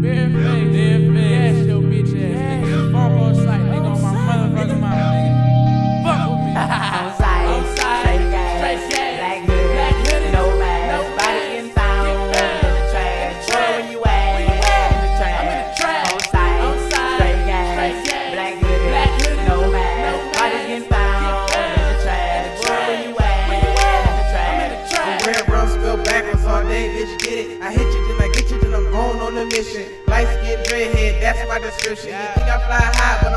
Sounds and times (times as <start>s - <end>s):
Pop music: 0.0s - 33.3s.